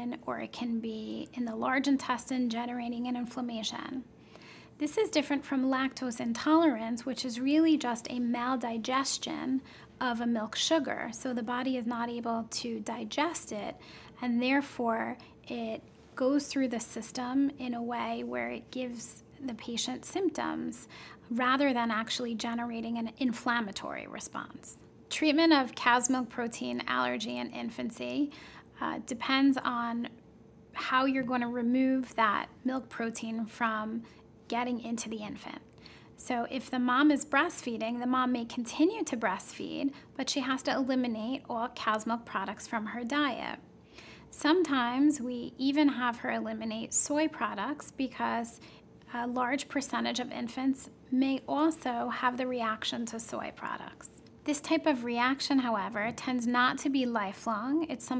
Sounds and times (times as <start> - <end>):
Speech: 0.0 - 4.1, 4.8 - 30.2, 30.8 - 43.6, 44.3 - 58.1.